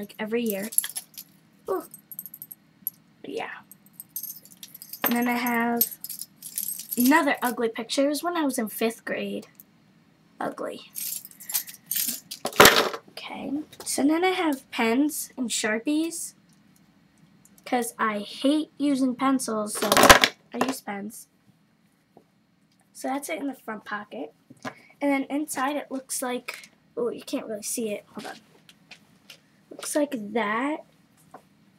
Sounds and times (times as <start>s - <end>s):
Speech: 0.0s - 0.8s, 3.3s - 3.7s, 5.1s - 5.9s, 7.0s - 9.5s, 10.4s - 11.0s, 13.2s - 16.4s, 17.7s - 21.3s, 23.0s - 24.4s, 25.0s - 28.5s, 29.8s - 30.9s
Inside, small room: 0.0s - 31.7s.